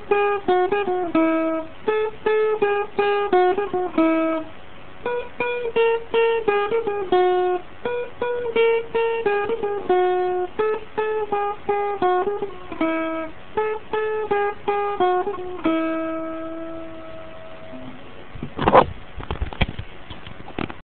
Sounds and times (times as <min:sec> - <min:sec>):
Acoustic guitar: 0:00.0 - 0:20.8.